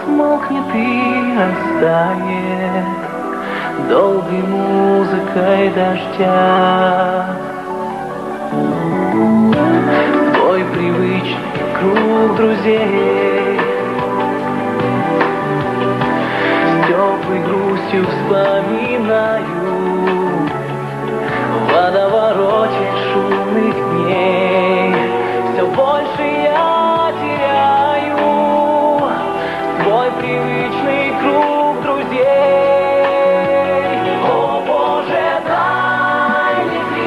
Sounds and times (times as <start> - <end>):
Music: 0.0 - 37.0.